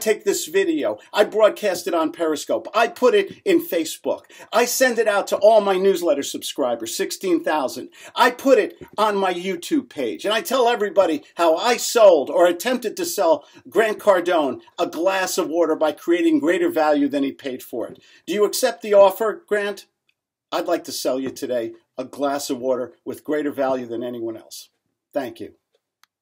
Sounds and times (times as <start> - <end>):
Speech: 0.0 - 19.9, 20.5 - 25.6.